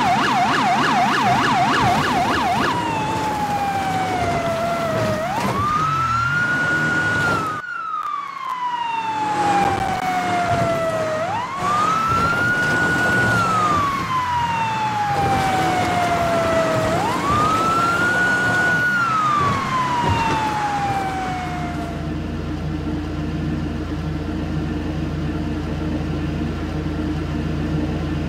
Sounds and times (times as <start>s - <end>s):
Police car (siren): 0.0s - 22.3s
Car: 0.0s - 28.2s.